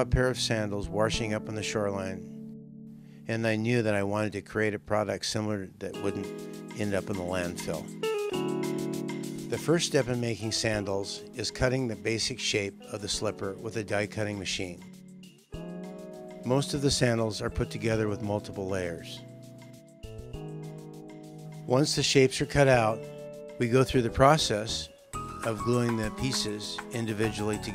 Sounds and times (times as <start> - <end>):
Speech: 0.0 - 2.3, 3.3 - 7.9, 9.5 - 14.8, 16.5 - 19.2, 21.7 - 23.0, 23.6 - 27.7
Music: 0.0 - 27.7.